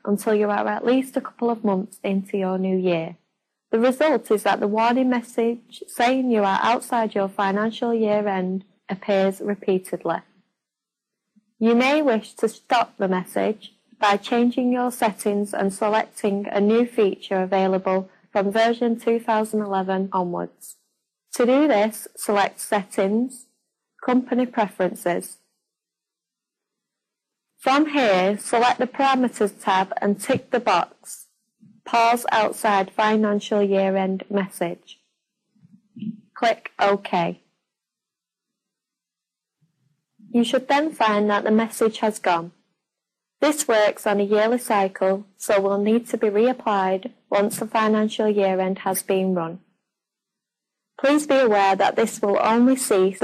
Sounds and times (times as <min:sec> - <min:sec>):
Speech: 0:00.0 - 0:03.2, 0:03.8 - 0:10.3, 0:11.6 - 0:20.8, 0:21.4 - 0:23.4, 0:24.0 - 0:25.4, 0:27.6 - 0:35.0, 0:35.8 - 0:37.4, 0:40.3 - 0:42.6, 0:43.4 - 0:49.6, 0:51.0 - 0:53.2.